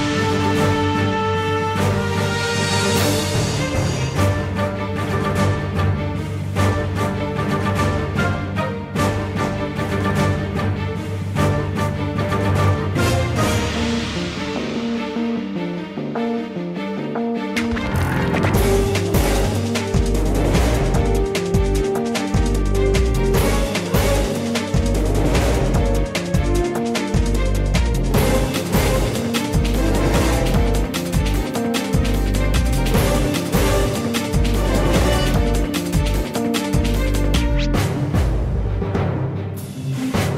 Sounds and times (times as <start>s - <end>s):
Music: 0.0s - 40.3s.